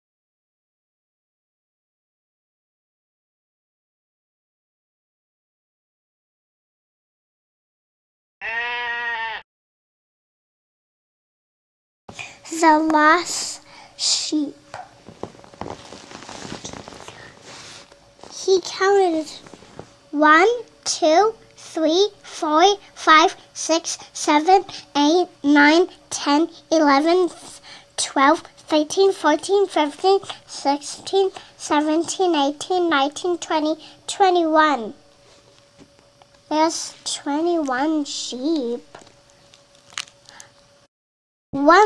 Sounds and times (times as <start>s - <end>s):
Bleat: 8.4s - 9.5s
Speech: 12.5s - 14.6s, 18.3s - 19.4s, 20.2s - 35.0s, 36.5s - 39.0s, 41.6s - 41.8s.